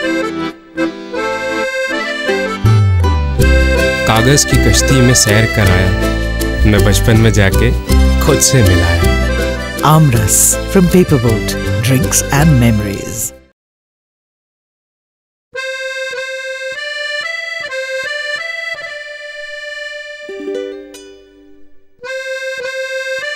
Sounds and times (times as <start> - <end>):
Music: 0.0 - 13.5, 15.6 - 23.3
Speech: 4.1 - 6.0, 6.6 - 9.2, 9.8 - 13.4.